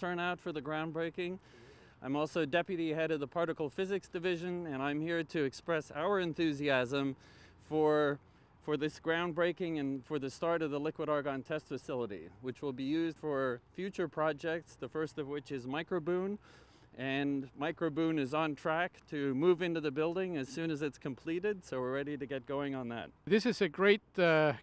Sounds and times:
Speech: 0.0s - 1.4s, 2.0s - 16.4s, 17.0s - 24.6s.

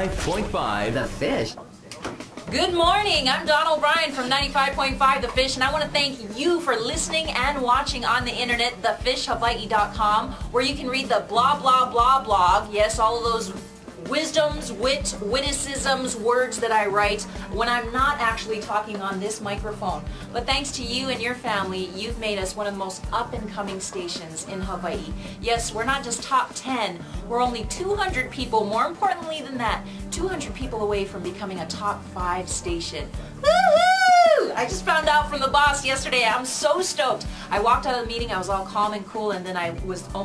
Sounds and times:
Music: 0.0s - 40.2s.

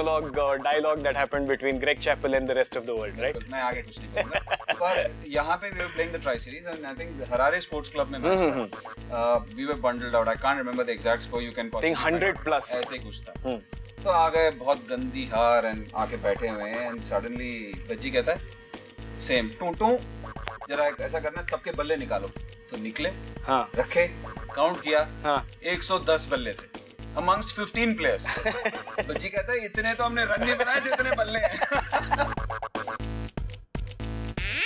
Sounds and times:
Speech: 4.7s - 13.2s.

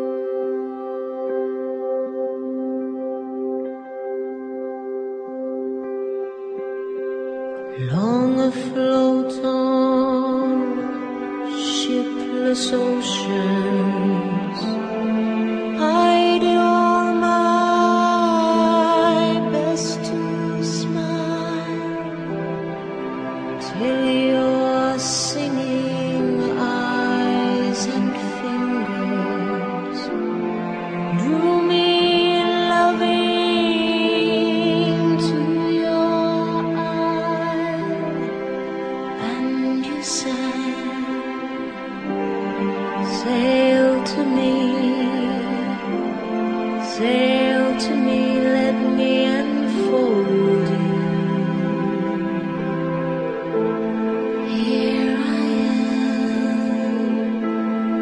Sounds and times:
Music: 0.0s - 58.0s.

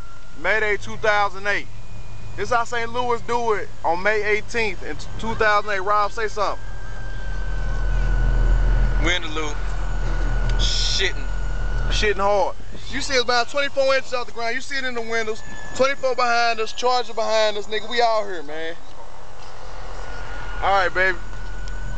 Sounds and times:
Speech: 0.4s - 1.7s, 2.4s - 6.6s, 9.0s - 9.6s, 10.6s - 11.3s, 11.9s - 18.8s, 20.6s - 21.2s.

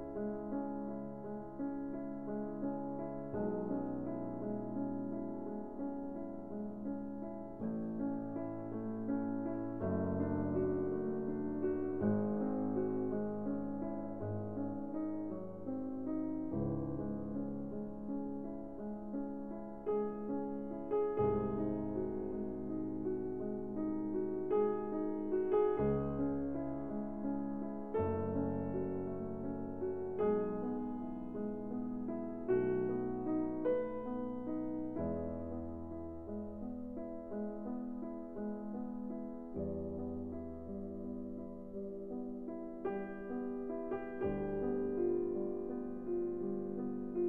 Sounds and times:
Music: 0.0s - 47.2s.

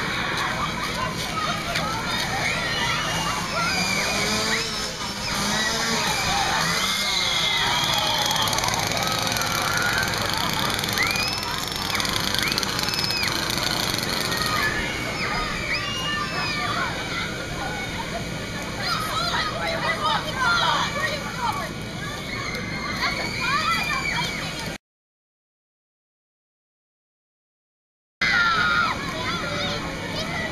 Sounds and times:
Speech: 0.0s - 4.2s, 14.5s - 24.8s, 28.3s - 30.5s
Outside, urban or manmade: 0.0s - 24.8s, 28.2s - 30.5s.

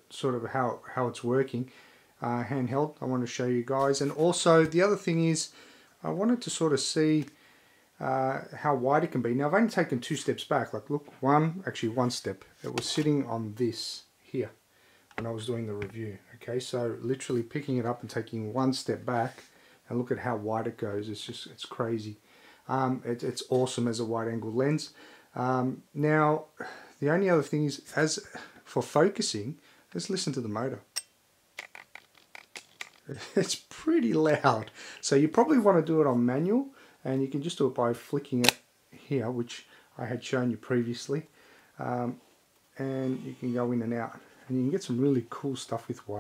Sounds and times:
Speech: 0.0s - 7.4s, 8.0s - 14.6s, 15.2s - 30.9s, 33.1s - 42.2s, 42.8s - 46.2s.

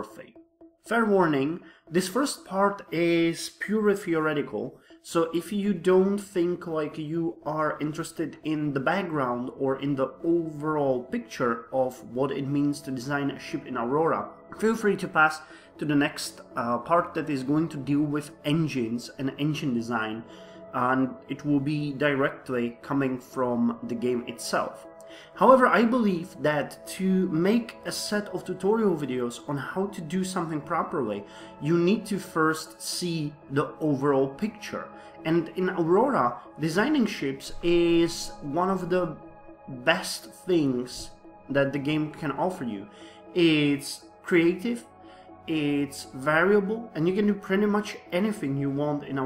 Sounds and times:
Speech: 0.0s - 24.8s, 25.4s - 49.2s
Music: 0.0s - 49.2s.

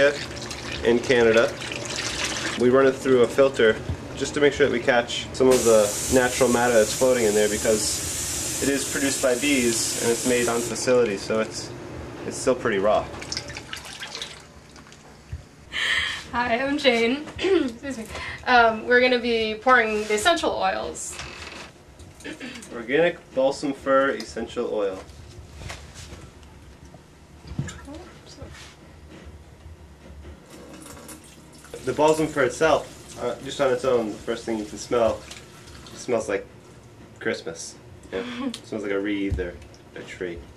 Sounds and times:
Fill (with liquid): 0.0s - 2.6s, 5.5s - 10.8s, 13.0s - 15.0s, 30.6s - 36.4s
Speech: 2.6s - 8.0s, 31.8s - 35.2s, 38.7s - 40.5s.

